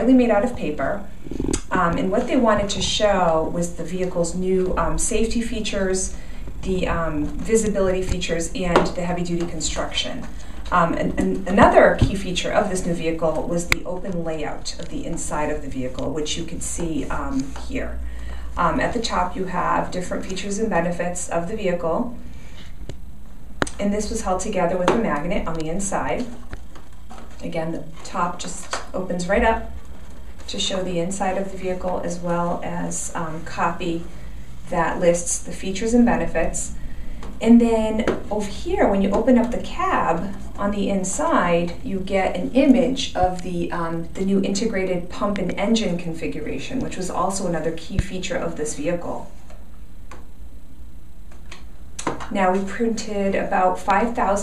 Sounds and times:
Speech: 0.0 - 18.0, 18.6 - 22.2, 23.7 - 26.4, 27.4 - 29.7, 30.5 - 34.1, 34.7 - 36.8, 37.4 - 49.4, 52.0 - 54.4.

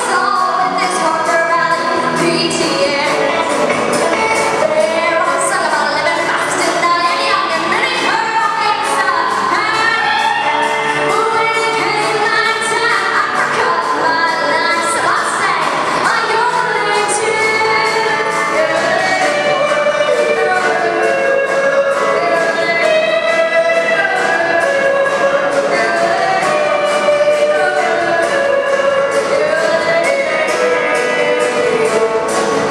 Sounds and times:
Music of Asia: 0.0 - 32.7
Song: 0.0 - 32.7
Yodeling: 9.1 - 32.7.

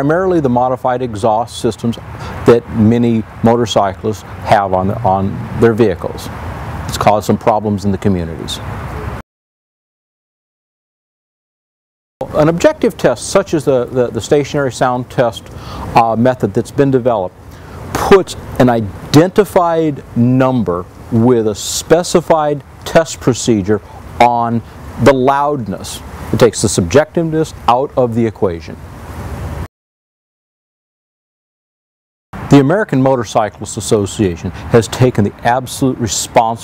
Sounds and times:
Speech: 0.0 - 6.3, 6.9 - 8.7, 12.2 - 17.4, 18.0 - 28.8, 32.5 - 36.6.

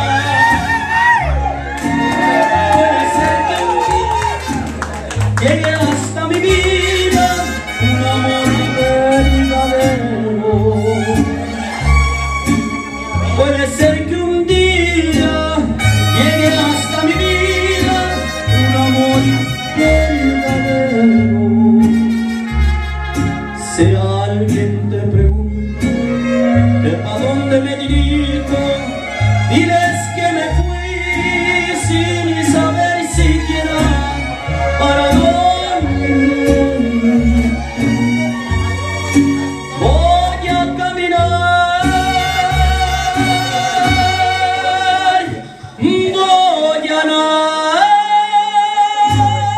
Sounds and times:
Inside, large room or hall: 0.0 - 49.5
Music: 0.0 - 49.5.

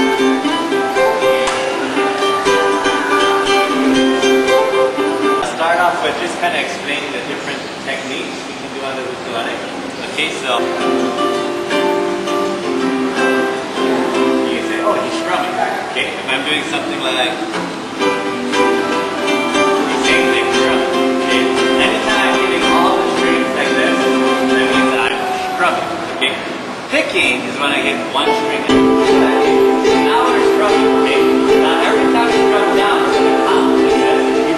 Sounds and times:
Guitar: 0.0 - 7.0, 9.8 - 34.5
Inside, large room or hall: 0.0 - 34.5
Ukulele: 0.0 - 34.5
Speech: 5.4 - 11.2, 14.4 - 17.5, 20.0 - 34.5.

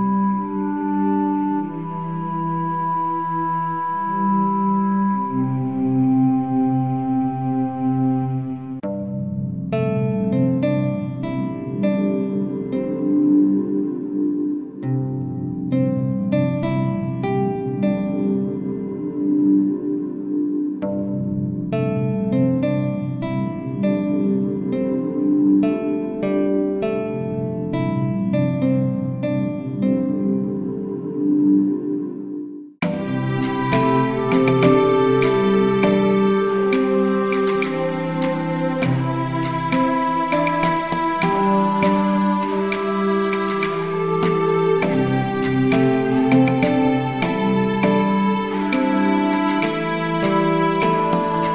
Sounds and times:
New-age music: 0.0 - 51.5
Soul music: 0.0 - 51.5.

